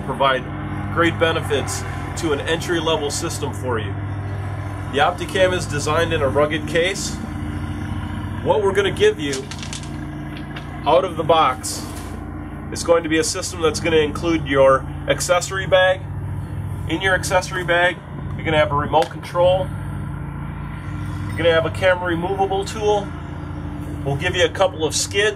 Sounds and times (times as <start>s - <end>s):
Speech: 0.0s - 4.0s, 4.9s - 7.2s, 8.4s - 9.5s, 10.8s - 12.0s, 12.7s - 16.0s, 16.9s - 19.7s, 21.3s - 23.1s, 24.0s - 25.3s.